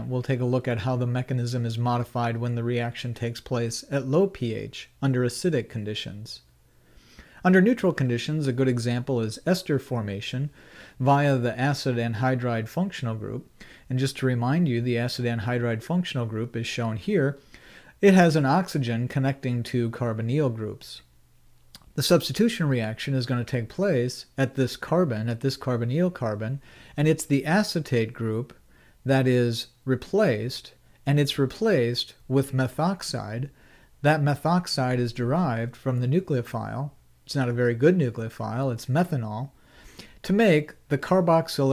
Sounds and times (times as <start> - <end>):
Speech: 0.0 - 6.5, 7.4 - 17.4, 18.0 - 21.1, 21.8 - 39.6, 40.2 - 41.7.